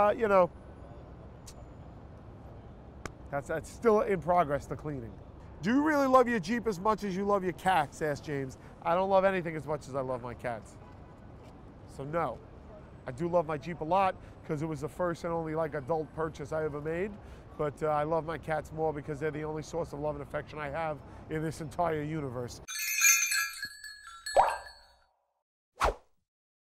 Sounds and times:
Speech: 0.0s - 0.5s, 3.3s - 10.8s, 11.9s - 22.7s
Outside, urban or manmade: 0.0s - 26.3s.

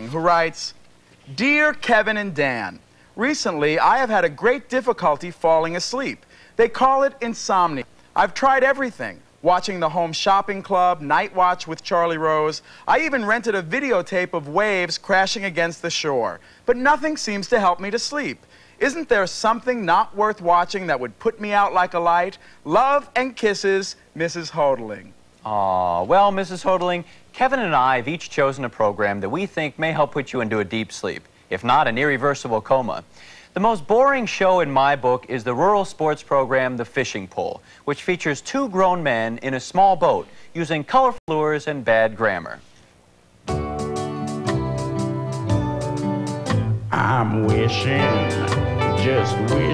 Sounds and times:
Speech: 0.0s - 42.7s, 46.9s - 49.7s.

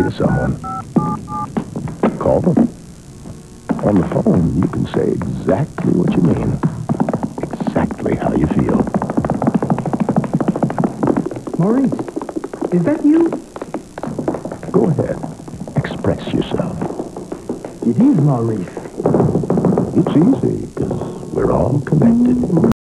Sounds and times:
Speech: 0.0s - 0.6s, 2.1s - 2.7s, 3.8s - 6.7s, 7.4s - 8.9s, 11.6s - 12.0s, 12.7s - 13.4s, 14.7s - 15.2s, 15.8s - 16.8s, 17.8s - 18.8s, 20.0s - 22.8s.

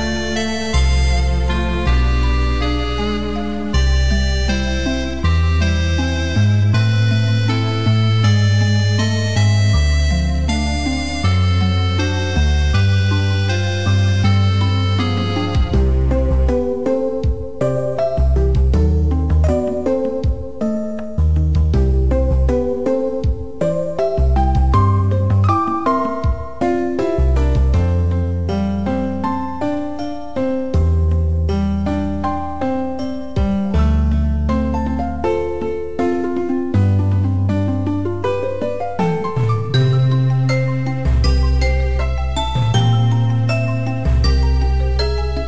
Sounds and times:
Background music: 0.0s - 45.4s.

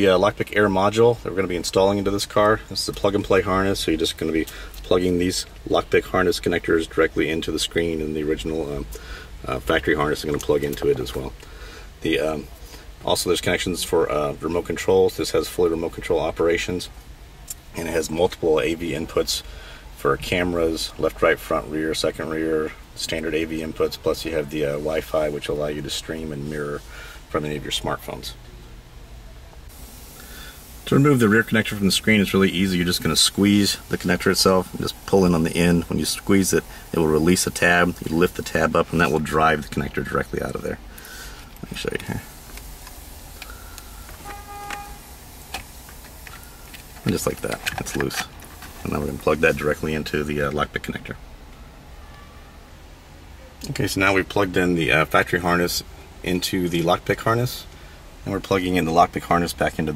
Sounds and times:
Speech: 0.0s - 11.4s, 12.0s - 28.4s, 30.8s - 40.8s, 41.6s - 42.3s, 47.0s - 51.2s, 53.6s - 59.9s
Outside, urban or manmade: 0.0s - 59.9s.

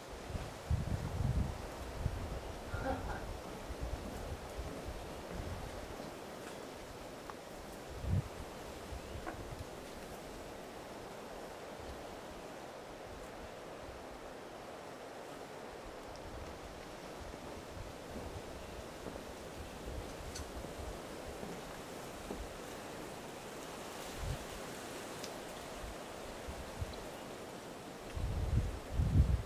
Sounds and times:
Rustle: 0.0s - 29.4s.

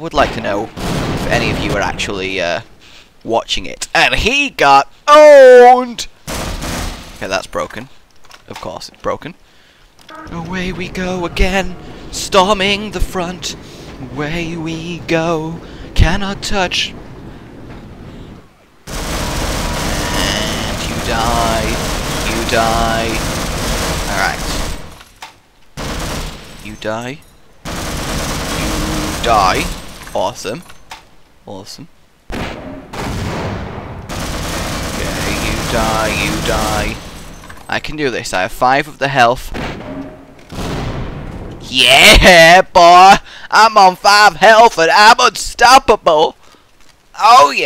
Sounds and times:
Fusillade: 6.3s - 7.2s, 18.9s - 25.0s, 25.8s - 26.8s, 27.6s - 30.1s, 33.0s - 37.3s.

